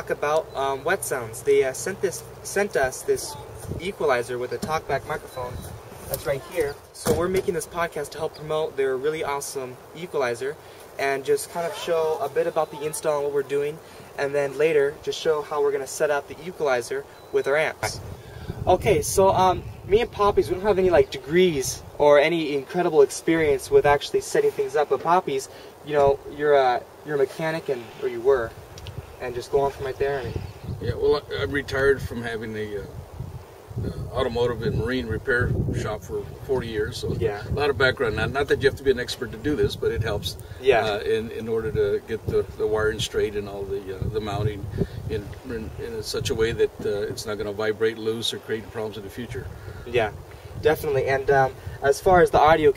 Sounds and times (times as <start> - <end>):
Speech: 0.0 - 18.0, 18.7 - 28.6, 29.2 - 32.9, 33.8 - 52.7.